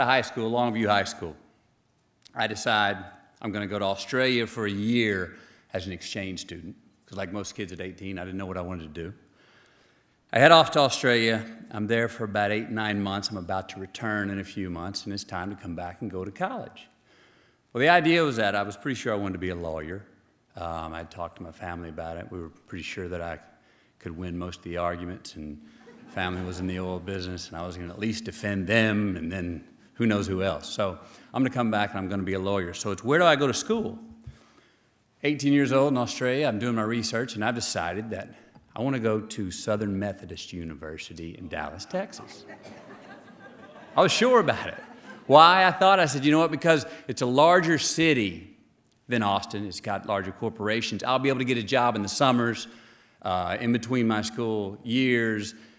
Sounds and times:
Male speech, man speaking: 0.0s - 1.4s, 2.3s - 9.2s, 10.4s - 16.9s, 17.8s - 34.1s, 35.2s - 42.5s, 44.0s - 48.5s, 49.1s - 55.6s
Narration, monologue: 0.0s - 55.7s.

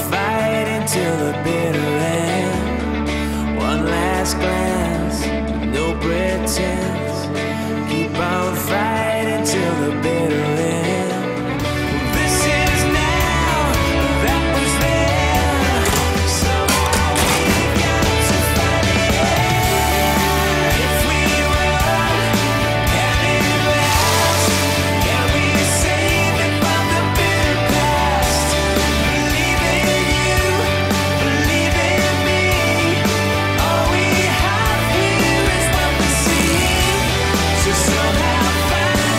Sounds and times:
Music: 0.0s - 39.1s.

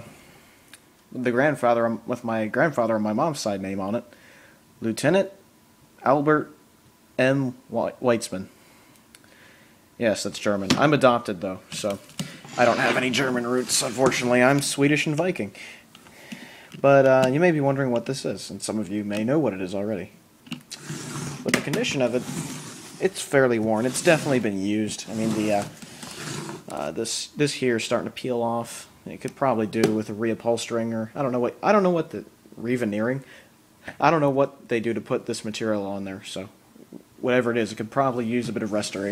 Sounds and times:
Speech: 1.1s - 4.1s, 4.8s - 5.4s, 6.0s - 6.6s, 7.2s - 8.5s, 10.0s - 15.7s, 16.8s - 20.2s, 21.4s - 22.3s, 23.0s - 25.7s, 26.7s - 33.3s, 33.9s - 36.6s, 37.2s - 39.1s.

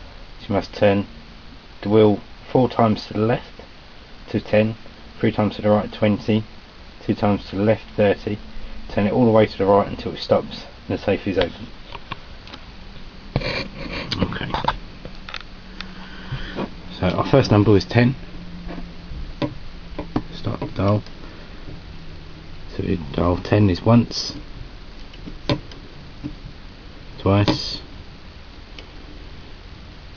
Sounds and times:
Speech: 0.4s - 1.1s, 1.8s - 3.6s, 4.3s - 11.7s, 14.2s - 14.8s, 16.9s - 18.2s, 20.4s - 21.1s, 22.7s - 24.4s, 27.2s - 27.9s.

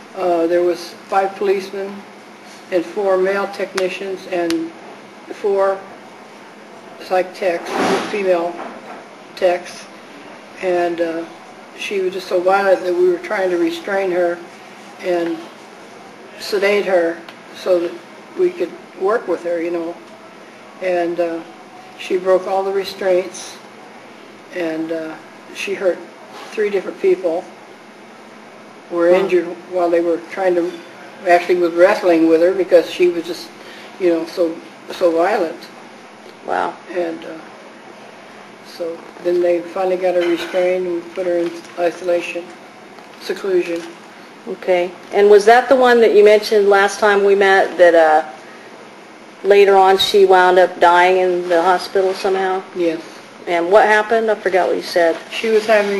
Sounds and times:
Speech: 0.2s - 2.1s, 2.7s - 5.9s, 7.0s - 8.6s, 9.4s - 9.9s, 10.6s - 14.4s, 15.0s - 15.5s, 16.4s - 20.0s, 20.8s - 23.7s, 24.5s - 27.5s, 28.9s - 35.7s, 36.4s - 37.5s, 38.7s - 42.6s, 43.2s - 48.4s, 49.4s - 55.9s.

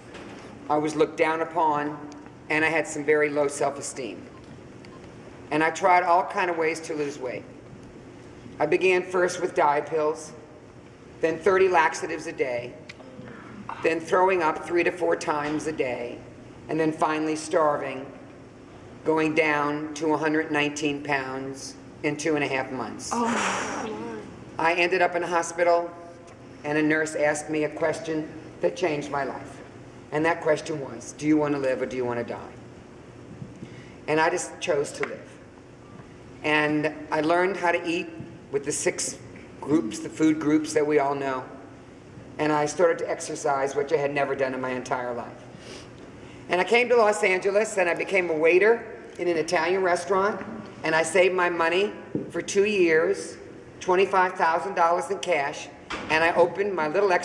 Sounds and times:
Narration, monologue: 0.0s - 57.2s.

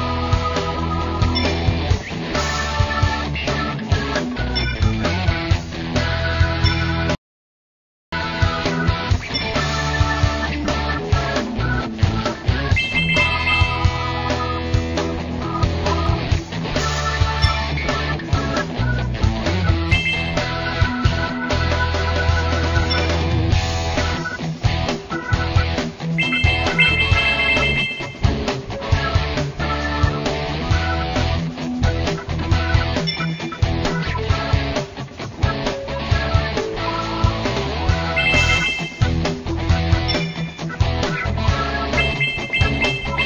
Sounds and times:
Music: 0.0s - 7.2s, 8.2s - 43.2s.

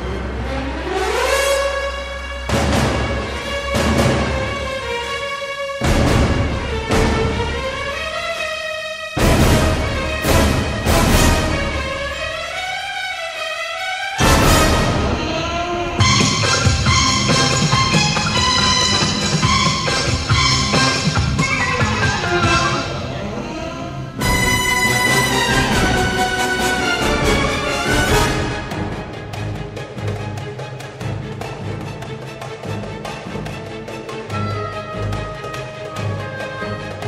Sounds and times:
Background music: 0.0s - 37.0s.

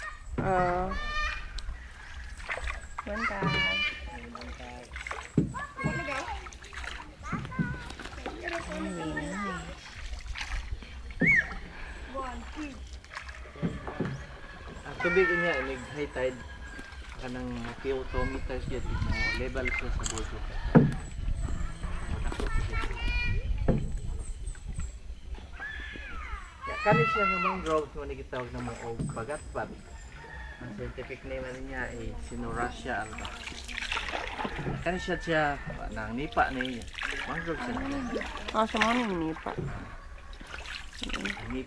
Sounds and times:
Outside, rural or natural: 0.0s - 41.6s
Water: 0.0s - 41.6s.

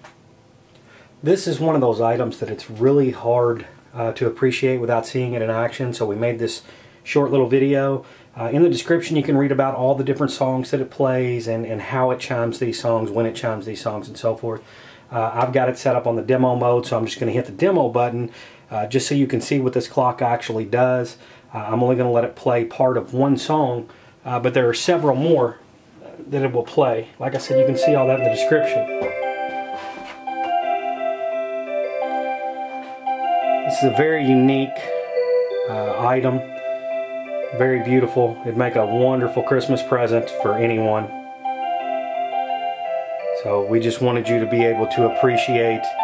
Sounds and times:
Speech: 1.2s - 28.9s, 33.7s - 34.9s, 35.7s - 36.4s, 37.5s - 41.1s, 43.4s - 46.0s
Music: 27.5s - 46.0s.

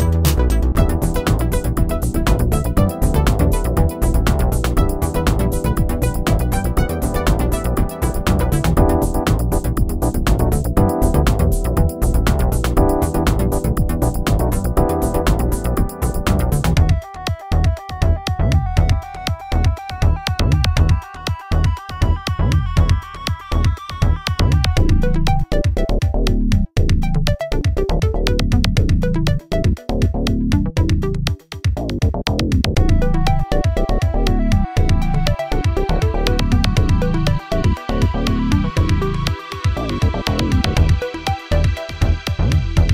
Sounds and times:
Electronica: 0.0s - 42.9s.

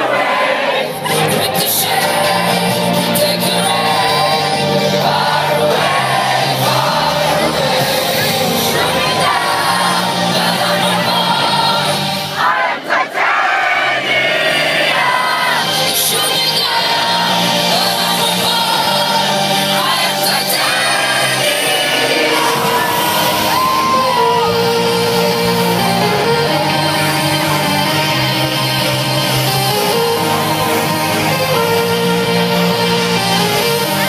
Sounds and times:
Music: 0.0s - 34.0s.

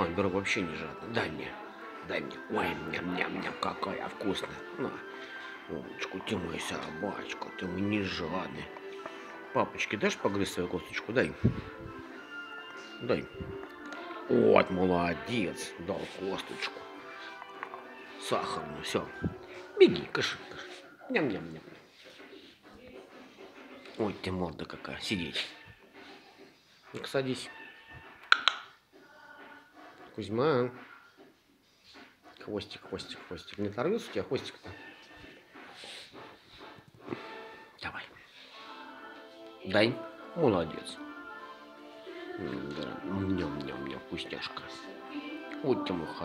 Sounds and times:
Speech: 0.0s - 5.0s, 14.3s - 16.7s, 18.2s - 19.1s, 23.9s - 25.5s, 32.4s - 34.8s, 42.4s - 44.9s, 45.6s - 46.2s
Music: 0.0s - 46.2s.

